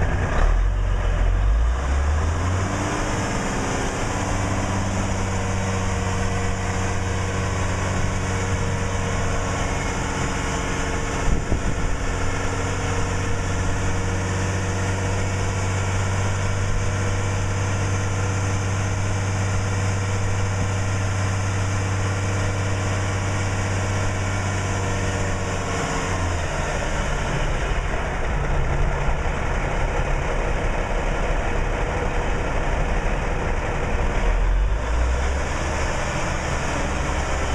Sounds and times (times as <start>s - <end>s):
Truck: 0.0s - 37.5s.